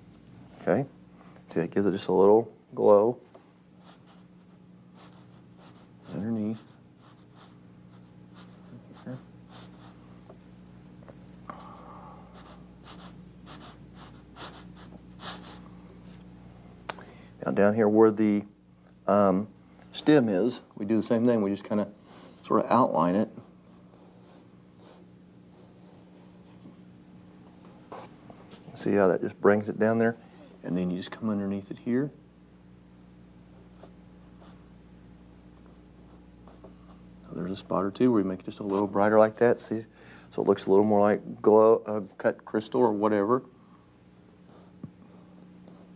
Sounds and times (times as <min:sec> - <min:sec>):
Speech: 0:01.5 - 0:03.3, 0:06.1 - 0:06.7, 0:17.4 - 0:23.4, 0:28.7 - 0:32.2, 0:37.2 - 0:43.5
Writing: 0:03.8 - 0:10.0, 0:12.4 - 0:15.7, 0:24.0 - 0:26.7, 0:33.6 - 0:34.7, 0:35.5 - 0:37.0.